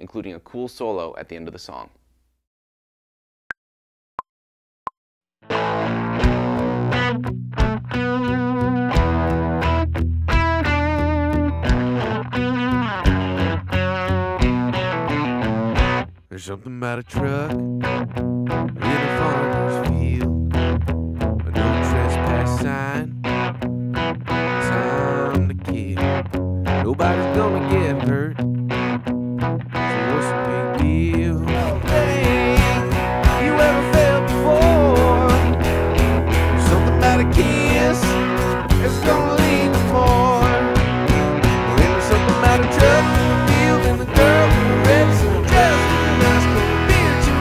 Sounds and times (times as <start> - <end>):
Music: 5.4 - 16.2, 17.2 - 47.4.